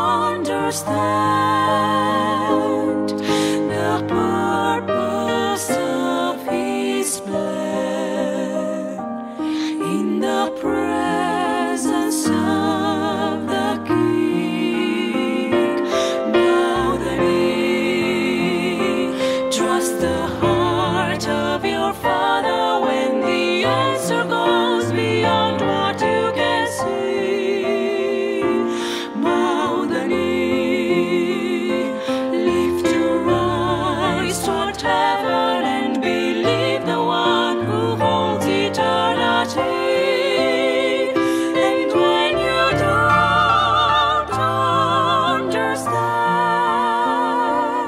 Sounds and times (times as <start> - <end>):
Christmas music: 0.0 - 47.8
Singing: 0.0 - 47.8.